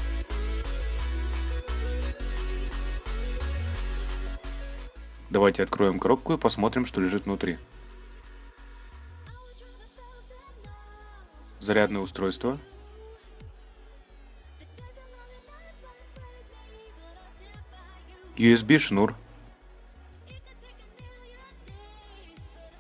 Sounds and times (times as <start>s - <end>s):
Music: 0.0s - 22.8s
Speech: 5.3s - 7.6s, 11.6s - 12.7s, 18.4s - 19.2s.